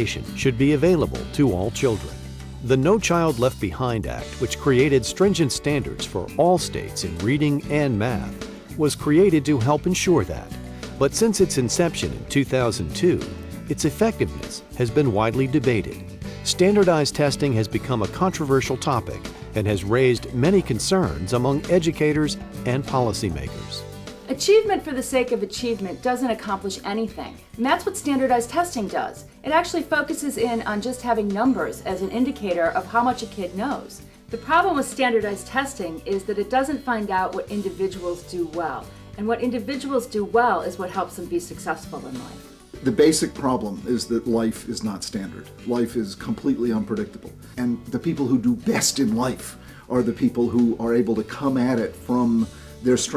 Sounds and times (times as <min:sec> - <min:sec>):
Music: 0:00.0 - 0:53.1
Speech: 0:00.0 - 0:53.1.